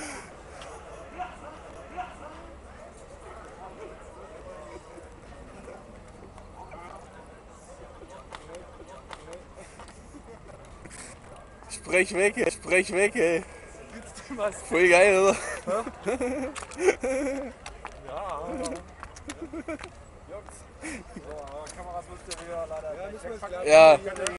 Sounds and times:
Speech: 21.2s - 24.3s.

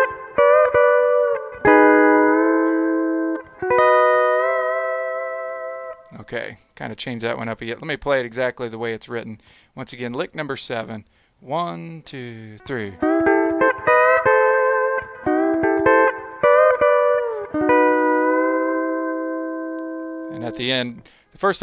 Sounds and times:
Steel guitar, slide guitar: 0.0s - 6.1s, 12.6s - 20.7s
Speech: 6.1s - 13.0s, 20.3s - 21.6s.

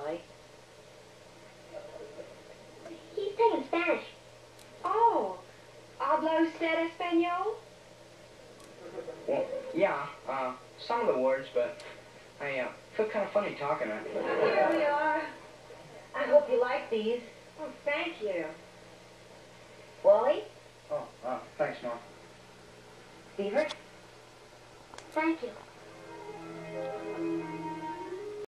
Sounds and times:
Music: 25.8s - 28.4s.

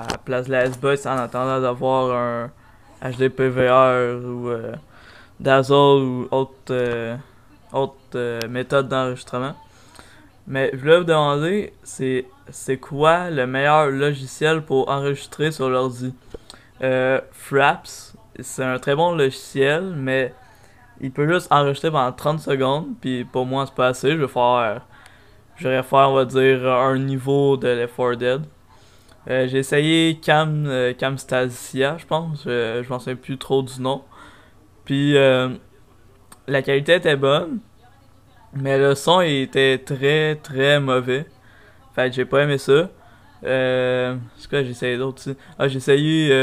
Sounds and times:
Speech: 0.0s - 46.4s.

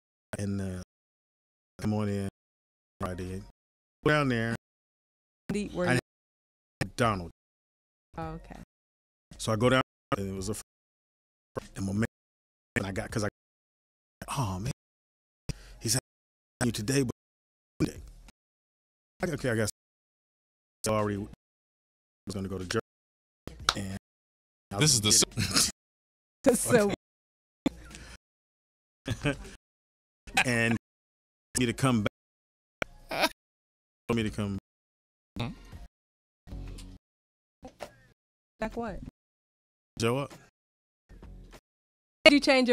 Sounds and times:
Speech: 0.4s - 0.9s, 1.8s - 2.3s, 3.0s - 3.5s, 4.1s - 4.6s, 5.5s - 6.0s, 6.8s - 7.3s, 8.2s - 8.6s, 9.4s - 10.6s, 11.6s - 12.1s, 12.8s - 13.3s, 15.8s - 16.0s, 16.6s - 17.2s, 19.2s - 19.7s, 20.9s - 21.4s, 22.3s - 22.8s, 23.8s - 24.0s, 24.7s - 25.4s, 26.5s - 27.0s, 30.4s - 30.8s, 31.6s - 32.1s, 34.1s - 34.6s, 40.0s - 40.3s, 42.3s - 42.7s
Music: 5.5s - 6.0s, 8.2s - 8.6s, 23.5s - 24.0s, 24.7s - 25.7s, 27.7s - 28.2s, 35.4s - 35.9s, 36.5s - 37.0s, 37.7s - 39.1s, 40.0s - 40.5s, 41.1s - 41.6s, 42.3s - 42.7s
Radio: 26.7s - 27.0s, 30.4s - 30.8s.

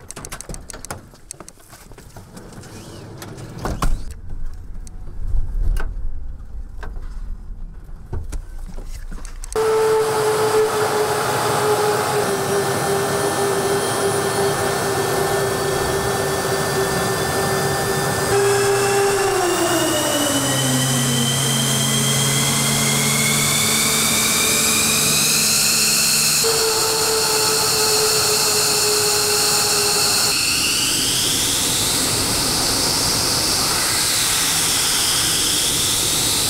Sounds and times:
Fixed-wing aircraft, airplane: 9.5s - 36.4s.

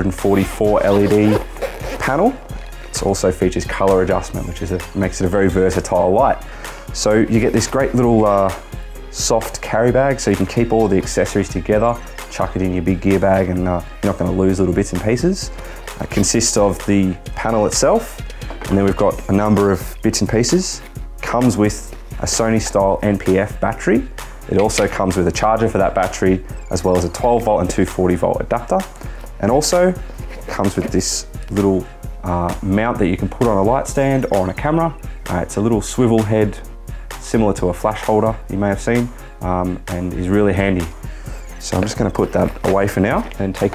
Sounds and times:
Speech: 0.0s - 41.0s, 41.6s - 43.7s
Music: 0.0s - 43.7s.

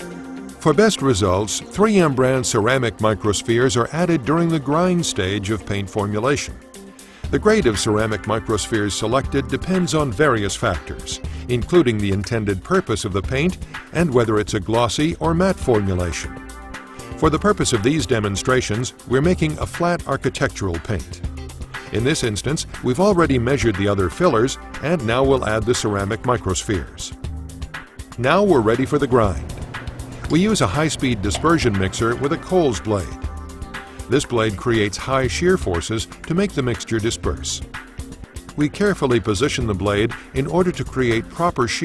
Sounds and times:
Music: 0.0s - 41.8s
Speech: 0.6s - 6.6s, 7.3s - 16.3s, 17.2s - 21.2s, 21.9s - 27.2s, 28.2s - 29.5s, 30.3s - 33.2s, 34.1s - 37.7s, 38.6s - 41.8s.

